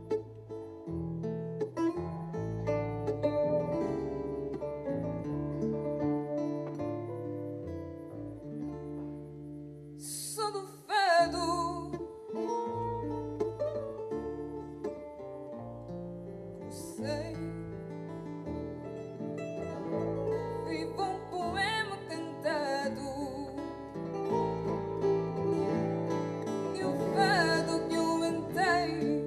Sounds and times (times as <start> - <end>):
Music: 0.0 - 29.2
Female singing: 10.0 - 12.2, 16.7 - 17.6, 20.6 - 23.7, 26.7 - 29.2.